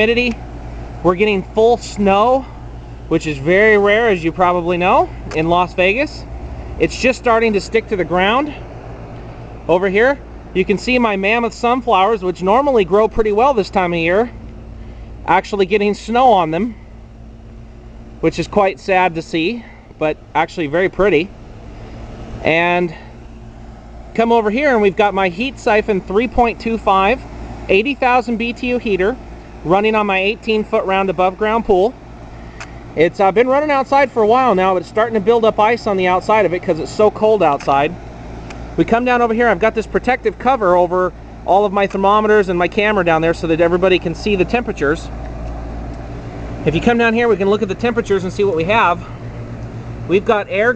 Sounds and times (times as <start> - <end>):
Speech: 0.0 - 0.4, 1.0 - 8.6, 9.7 - 14.4, 15.3 - 16.8, 18.2 - 21.3, 22.4 - 23.1, 24.2 - 32.0, 33.0 - 38.0, 38.8 - 45.1, 46.6 - 49.1, 50.1 - 50.7.